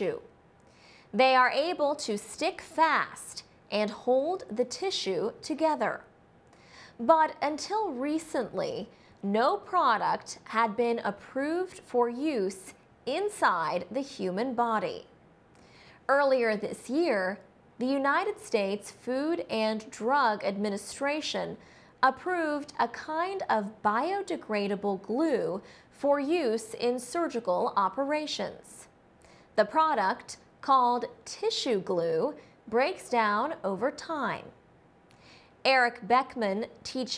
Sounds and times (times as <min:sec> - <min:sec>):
Speech: 0:00.0 - 0:00.3, 0:01.2 - 0:06.1, 0:07.0 - 0:15.1, 0:16.1 - 0:28.9, 0:29.6 - 0:34.6, 0:35.7 - 0:37.1.